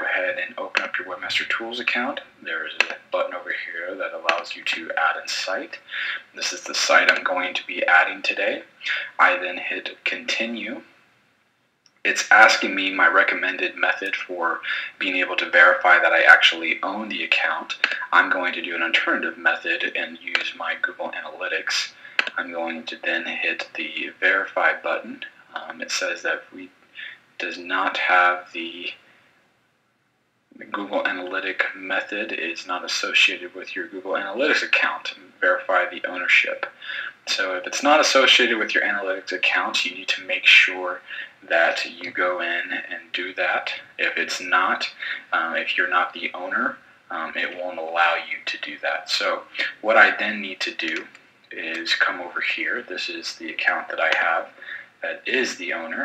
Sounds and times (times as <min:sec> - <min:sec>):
Speech: 0:00.0 - 0:10.9, 0:12.1 - 0:29.0, 0:30.6 - 0:56.0.